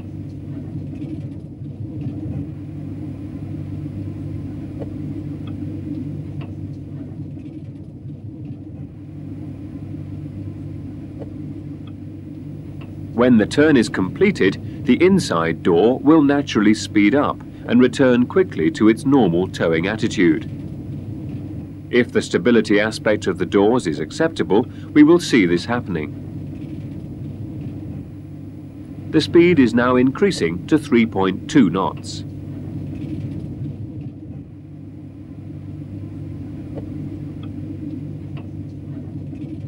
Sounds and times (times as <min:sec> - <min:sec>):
Rumble: 0:00.0 - 0:39.6
Speech: 0:13.2 - 0:20.5, 0:21.9 - 0:26.1, 0:29.1 - 0:32.3.